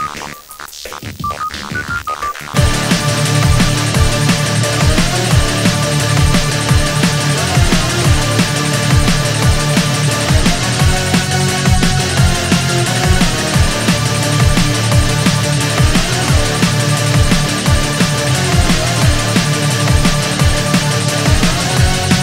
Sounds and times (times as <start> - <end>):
Music: 0.0 - 22.2.